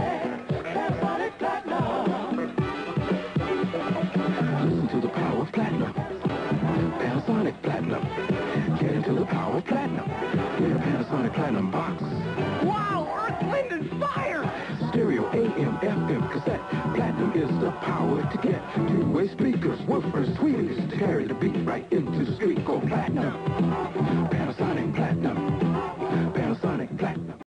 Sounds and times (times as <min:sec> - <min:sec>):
Music: 0:00.0 - 0:27.4.